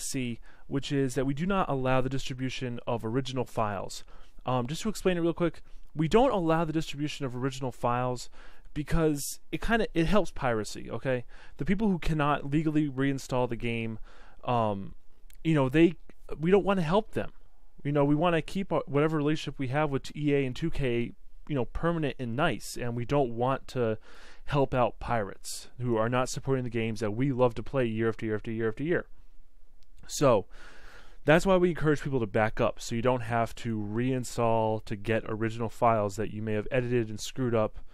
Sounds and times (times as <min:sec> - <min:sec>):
Speech: 0:00.0 - 0:29.1, 0:30.1 - 0:30.5, 0:31.2 - 0:37.8.